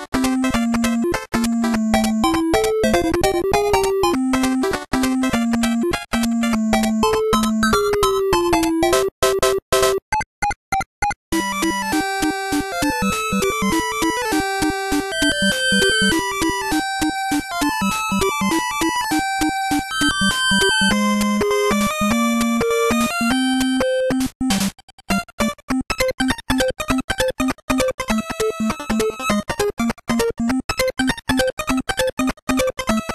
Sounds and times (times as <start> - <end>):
Music: 0.0 - 10.1, 11.0 - 33.1.